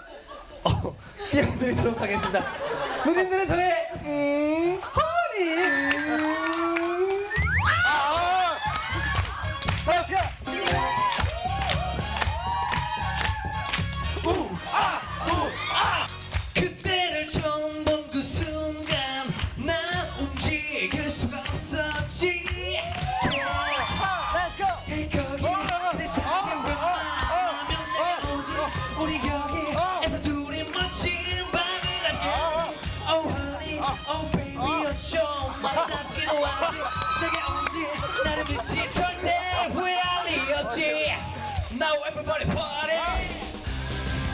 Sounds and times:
Music: 0:07.2 - 0:44.3
Male singing: 0:16.6 - 0:23.0, 0:24.8 - 0:40.9.

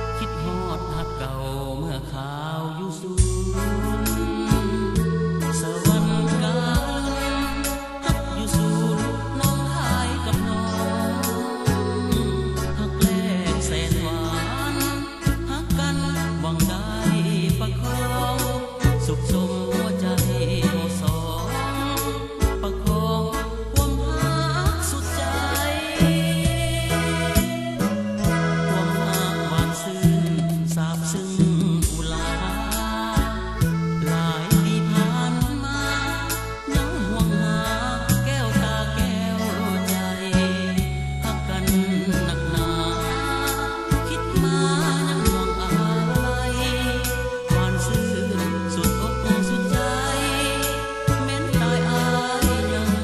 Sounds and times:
Music: 0:00.0 - 0:53.0.

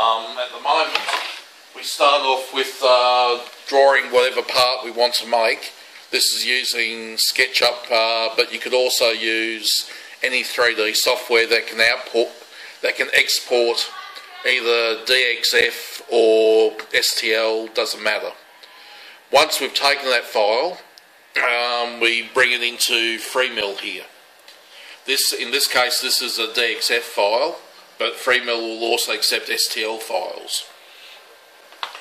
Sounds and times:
Speech: 0:00.0 - 0:18.4, 0:19.3 - 0:24.2, 0:25.1 - 0:30.7.

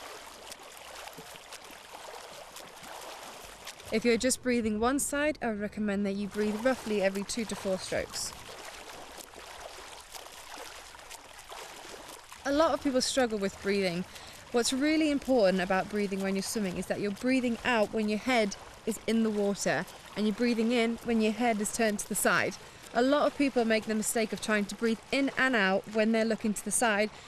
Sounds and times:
Speech: 0:04.0 - 0:08.3, 0:12.5 - 0:27.1.

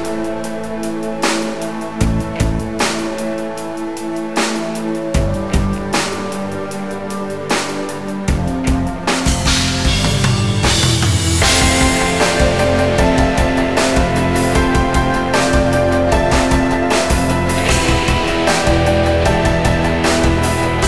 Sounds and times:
Music: 0:00.0 - 0:20.8.

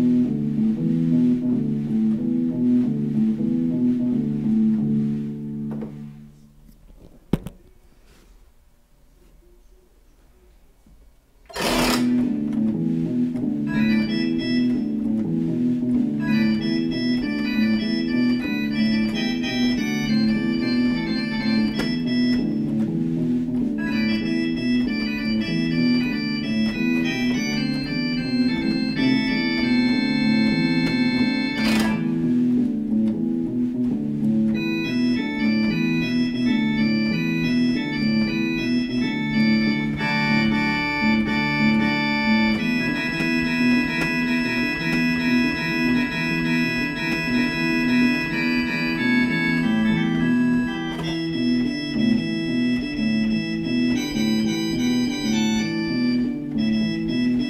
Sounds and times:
Electric piano: 0:00.0 - 0:07.6, 0:11.4 - 0:57.5
Organ: 0:00.0 - 0:08.3, 0:09.2 - 0:57.5.

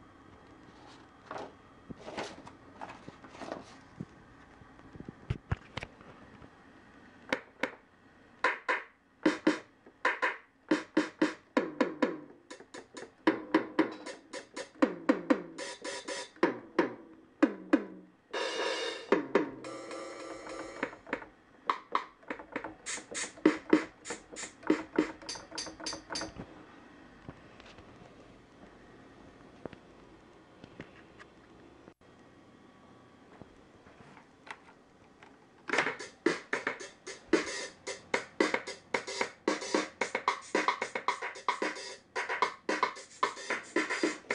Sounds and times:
Drum machine: 0:08.4 - 0:26.4, 0:35.7 - 0:44.3.

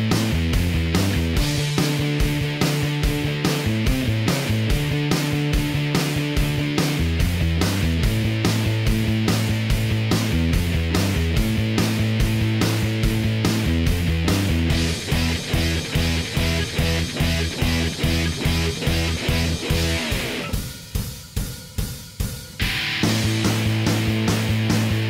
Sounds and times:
Music: 0:00.0 - 0:25.0.

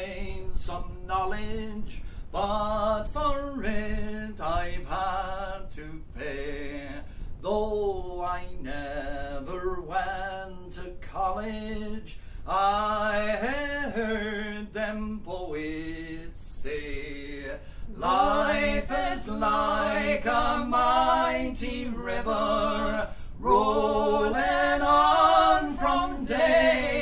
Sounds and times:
Male singing: 0:00.0 - 0:19.6.

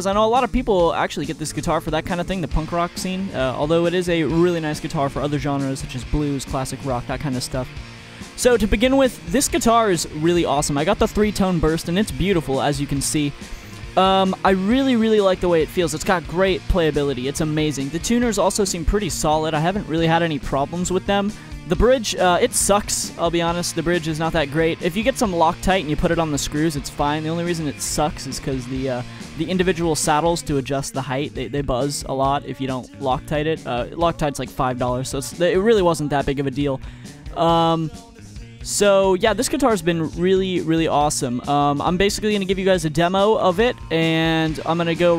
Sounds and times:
Speech: 0:00.0 - 0:07.7, 0:08.4 - 0:38.0, 0:38.6 - 0:45.1.

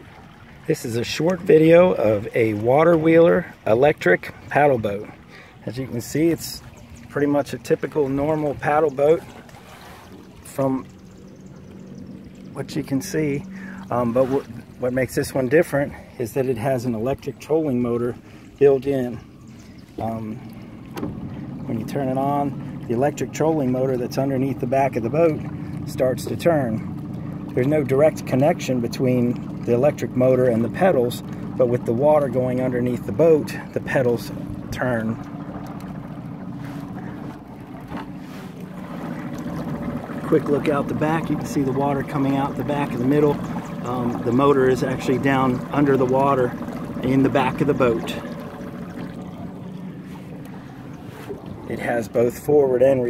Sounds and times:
Boat, Water vehicle: 0:00.0 - 0:53.1
Speech: 0:00.7 - 0:09.3, 0:10.5 - 0:10.9, 0:12.6 - 0:19.2, 0:20.0 - 0:20.4, 0:21.7 - 0:26.9, 0:27.6 - 0:35.2, 0:40.2 - 0:48.3, 0:51.7 - 0:53.1.

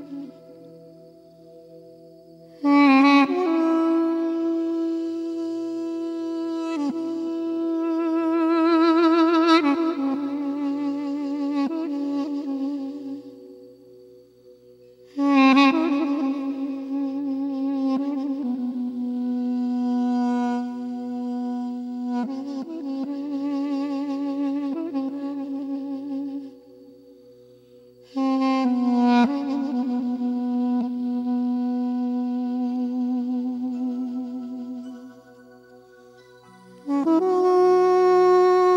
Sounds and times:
Flute: 0:00.0 - 0:38.7.

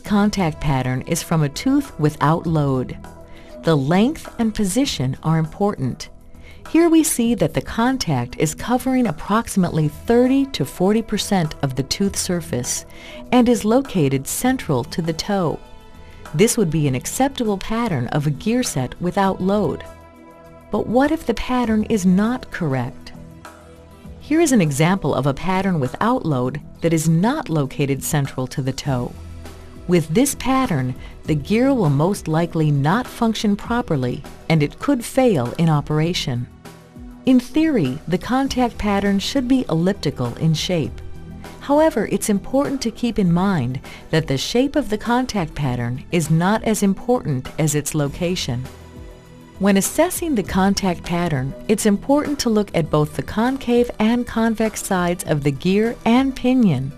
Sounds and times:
Speech: 0:00.0 - 0:03.0, 0:03.7 - 0:06.1, 0:06.7 - 0:15.6, 0:16.4 - 0:19.9, 0:20.8 - 0:23.1, 0:24.2 - 0:29.1, 0:29.9 - 0:36.5, 0:37.3 - 0:41.0, 0:41.6 - 0:48.6, 0:49.6 - 0:56.9
Music: 0:00.0 - 0:56.9.

